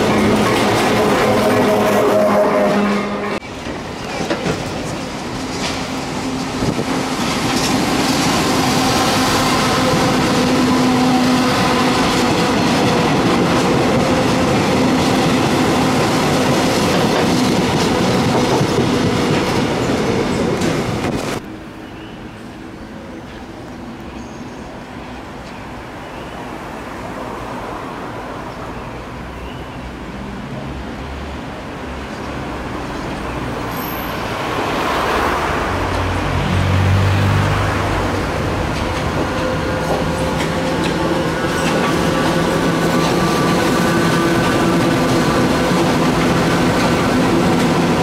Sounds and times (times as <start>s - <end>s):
Railroad car, train wagon: 0.0s - 48.0s
Train: 0.0s - 48.0s.